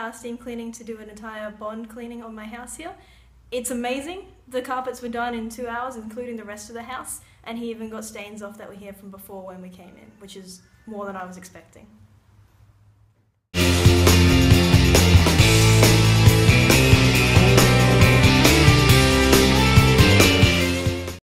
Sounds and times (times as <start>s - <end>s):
Speech: 0.0s - 12.0s
Music: 13.6s - 21.2s.